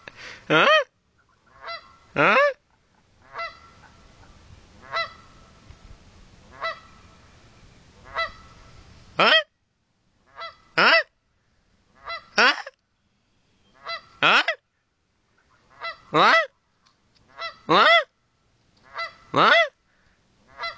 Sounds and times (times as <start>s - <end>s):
Honk: 0.6s - 2.6s, 3.2s - 5.4s, 6.5s - 6.9s, 8.0s - 8.6s, 10.3s - 11.1s, 12.0s - 12.7s, 13.8s - 14.6s, 15.4s - 16.5s, 17.3s - 18.1s, 18.8s - 19.7s, 20.5s - 20.7s.